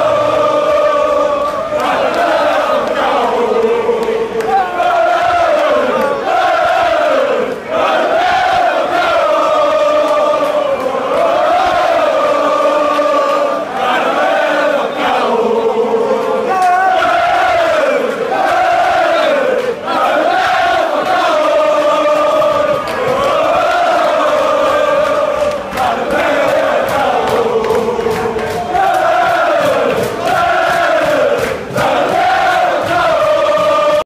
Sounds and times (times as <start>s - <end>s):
Choir: 0.0s - 34.0s.